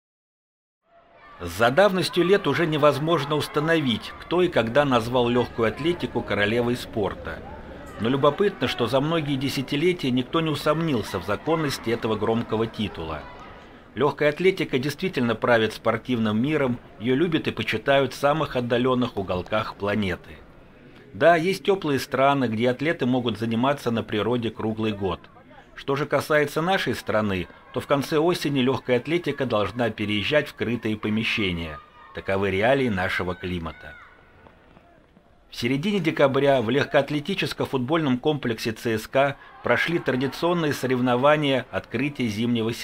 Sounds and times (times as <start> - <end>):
Run: 1.2 - 13.8, 30.8 - 37.2
Speech: 1.3 - 20.4, 21.2 - 34.1, 35.5 - 42.8.